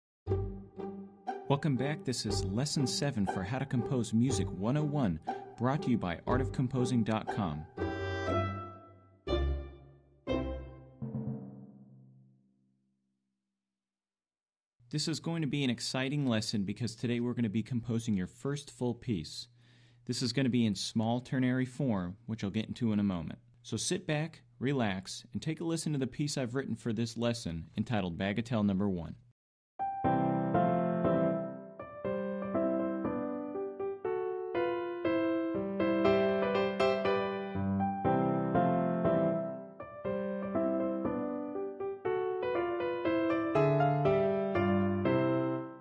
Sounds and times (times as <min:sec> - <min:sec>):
Music: 0:00.3 - 0:12.1, 0:29.8 - 0:45.8.